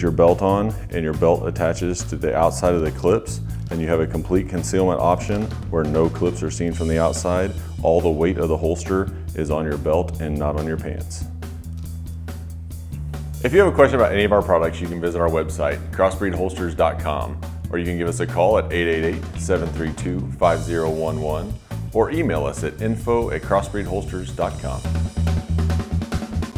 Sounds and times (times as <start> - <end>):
Speech: 0.0 - 11.3, 13.4 - 24.9
Music: 0.0 - 26.5.